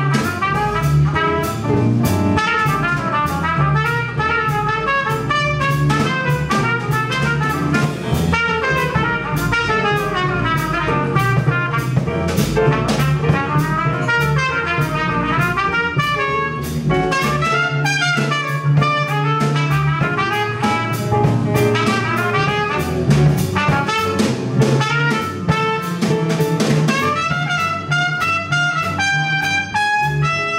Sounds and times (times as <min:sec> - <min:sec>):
Trumpet: 0:00.0 - 0:30.5.